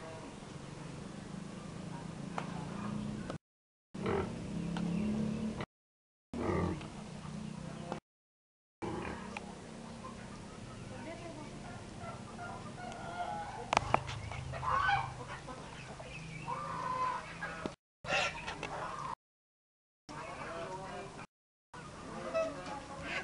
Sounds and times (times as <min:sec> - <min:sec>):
Pig: 0:04.0 - 0:04.3, 0:08.8 - 0:09.4, 0:16.5 - 0:19.2, 0:22.0 - 0:23.2
Bird: 0:09.2 - 0:19.2
Speech: 0:10.7 - 0:13.8, 0:20.1 - 0:21.3, 0:22.0 - 0:23.2.